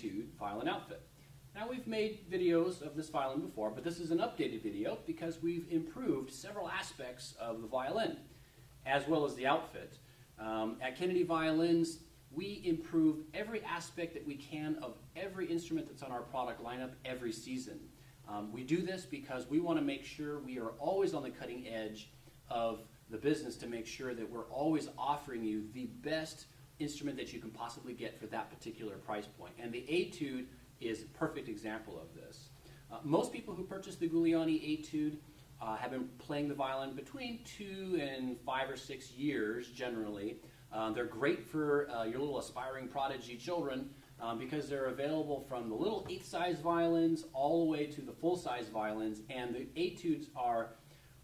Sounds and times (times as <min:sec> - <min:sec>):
Speech: 0:00.0 - 0:51.2.